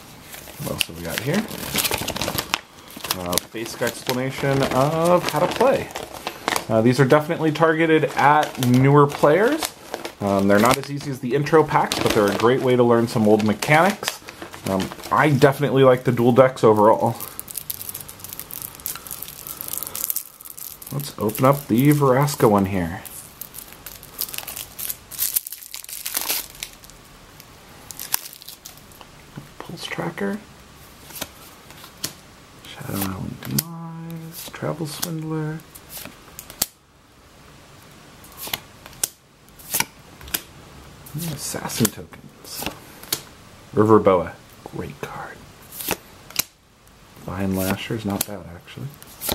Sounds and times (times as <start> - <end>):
Inside, small room: 0.0 - 49.3
Crumpling, crinkling: 0.3 - 29.1, 47.3 - 49.3
Speech: 0.6 - 1.5, 3.1 - 6.0, 6.7 - 17.3, 20.9 - 23.1, 29.6 - 30.5, 32.6 - 35.7, 41.1 - 42.7, 43.7 - 45.4, 47.2 - 49.0.